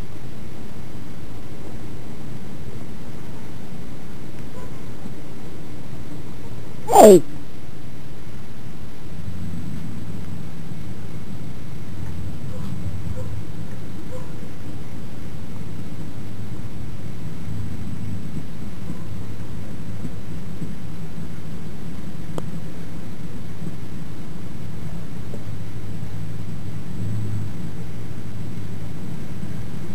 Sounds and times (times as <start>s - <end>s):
Speech: 6.9s - 7.2s.